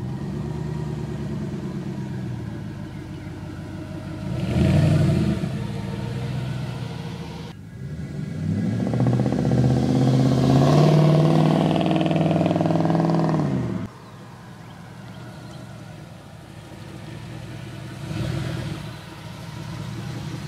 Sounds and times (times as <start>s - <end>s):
Truck: 0.0s - 20.4s.